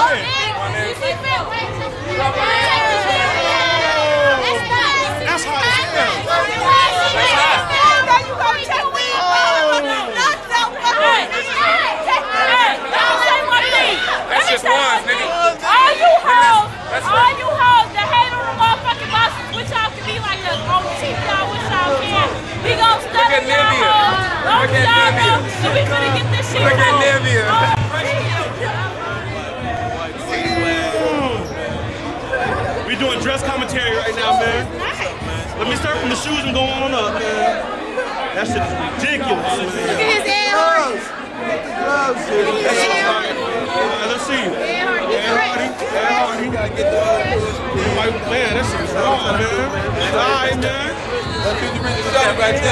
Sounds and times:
Chatter: 0:00.0 - 0:52.7
Inside, public space: 0:00.0 - 0:52.7.

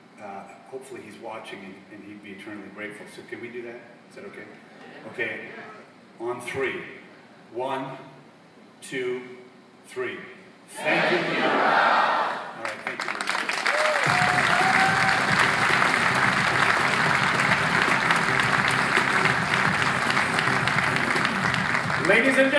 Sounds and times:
Speech: 0:00.2 - 0:08.2, 0:08.8 - 0:11.0, 0:22.0 - 0:22.5
Whoop: 0:13.6 - 0:15.4
Music: 0:14.1 - 0:22.5.

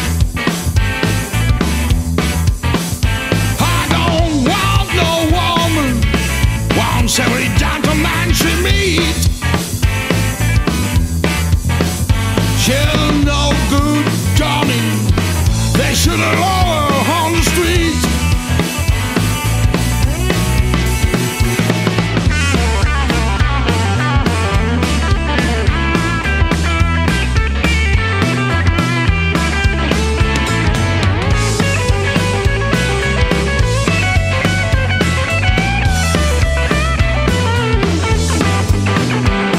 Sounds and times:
Grunge: 0:00.0 - 0:39.5.

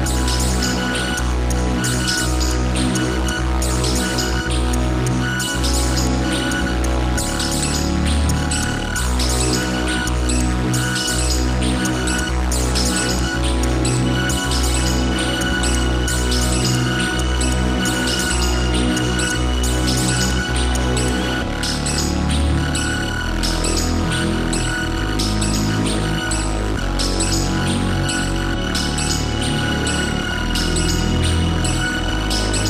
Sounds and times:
Music: 0:00.0 - 0:32.7.

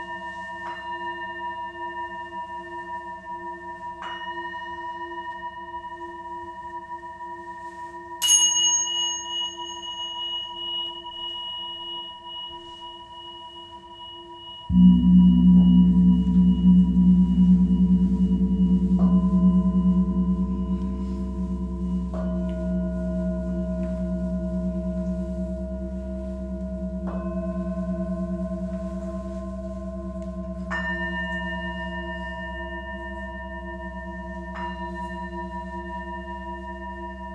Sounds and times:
Chirp tone: 0:00.0 - 0:37.3
Gong: 0:00.0 - 0:37.3
Tuning fork: 0:00.0 - 0:37.3.

